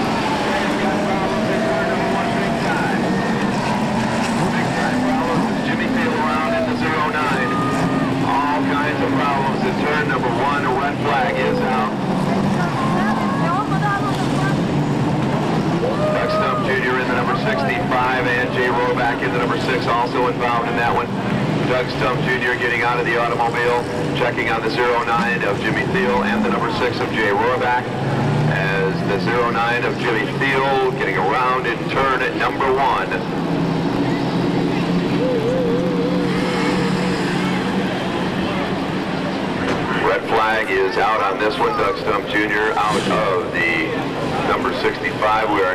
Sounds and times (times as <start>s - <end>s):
Speech: 0.5s - 3.1s, 4.4s - 14.6s, 15.8s - 21.1s, 21.7s - 27.9s, 28.5s - 33.3s, 39.8s - 45.7s.